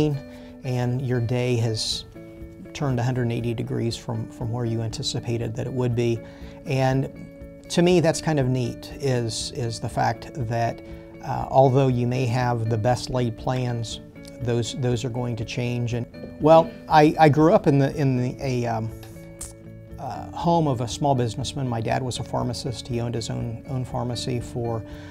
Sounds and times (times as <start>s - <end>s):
Speech: 0.0s - 2.0s, 2.8s - 7.1s, 7.7s - 18.9s, 20.0s - 24.8s
Music: 0.0s - 25.1s.